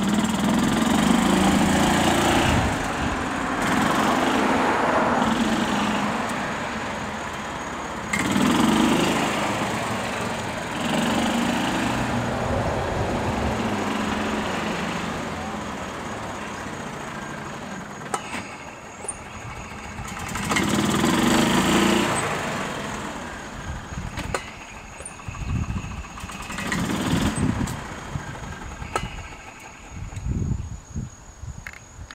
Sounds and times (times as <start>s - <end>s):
Car: 0.0s - 32.1s
Air brake: 18.1s - 18.8s, 28.8s - 29.8s.